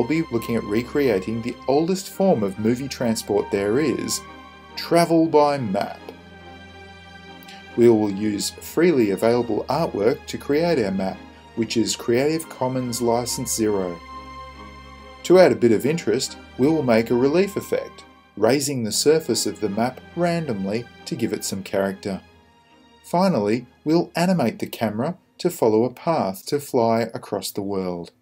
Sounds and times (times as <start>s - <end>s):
Speech: 0.0s - 4.2s, 4.8s - 6.1s, 7.8s - 14.0s, 15.3s - 22.2s, 23.1s - 28.2s
Music: 0.0s - 28.2s.